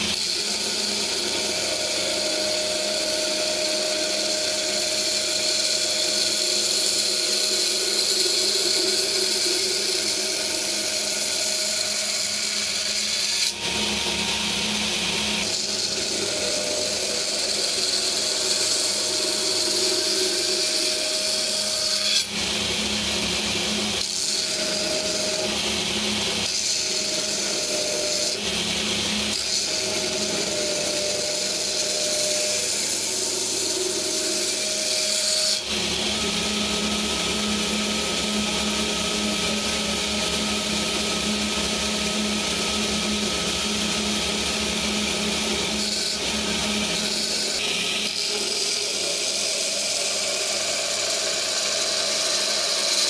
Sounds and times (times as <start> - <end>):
Tools: 0.0 - 42.1, 44.3 - 53.0.